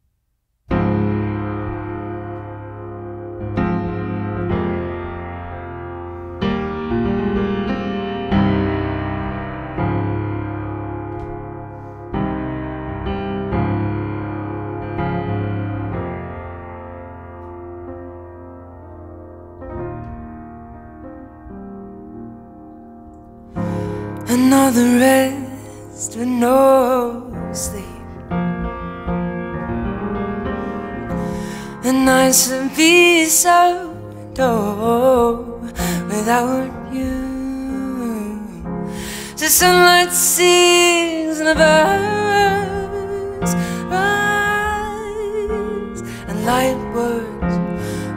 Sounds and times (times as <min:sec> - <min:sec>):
Music: 0:00.6 - 0:48.1.